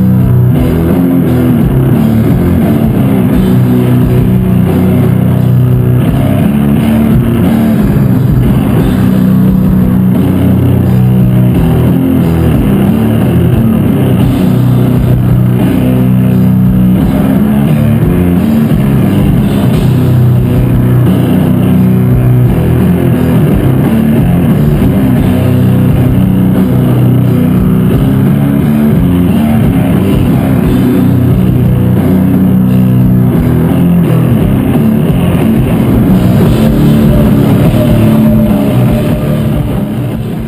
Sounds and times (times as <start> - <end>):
Ambient music: 0.0 - 40.4.